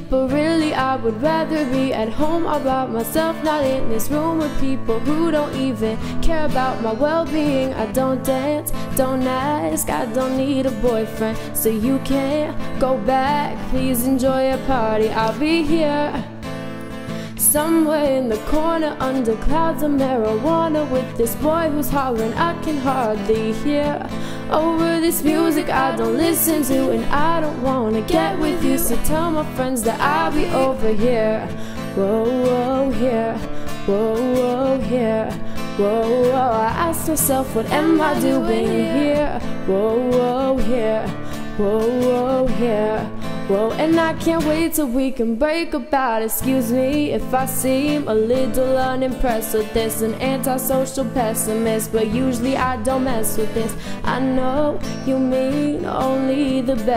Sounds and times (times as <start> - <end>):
Female singing: 0.0 - 16.3, 17.4 - 56.9
Music: 0.0 - 56.9.